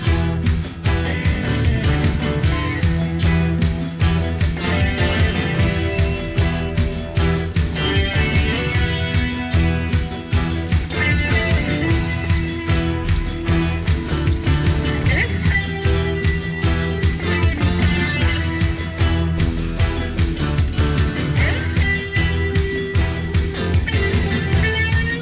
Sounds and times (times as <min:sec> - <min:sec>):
Music: 0:00.0 - 0:25.2.